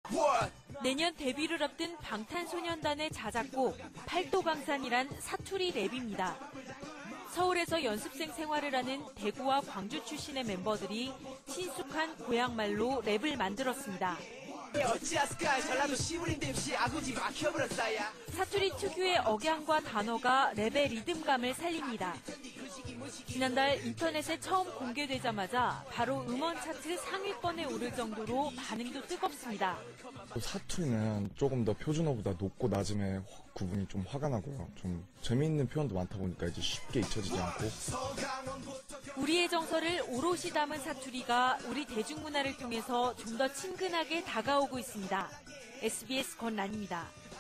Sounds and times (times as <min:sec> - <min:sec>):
Music: 0:00.0 - 0:47.4
Speech: 0:00.1 - 0:06.4, 0:07.3 - 0:14.2, 0:14.8 - 0:22.2, 0:23.3 - 0:38.0, 0:39.2 - 0:47.1.